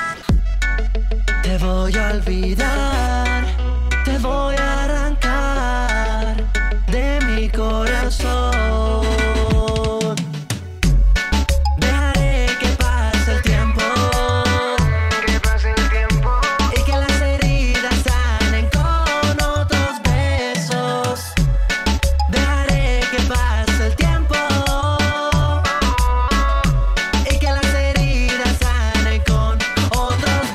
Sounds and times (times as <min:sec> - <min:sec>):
Dance music: 0:00.0 - 0:30.5.